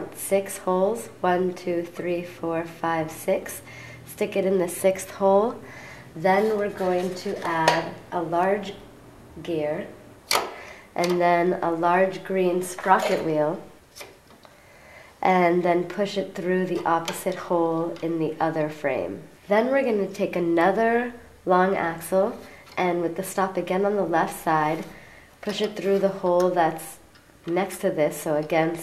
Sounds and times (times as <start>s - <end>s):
Speech: 0.0s - 5.6s, 6.2s - 8.8s, 9.4s - 10.0s, 11.0s - 13.7s, 15.2s - 28.8s.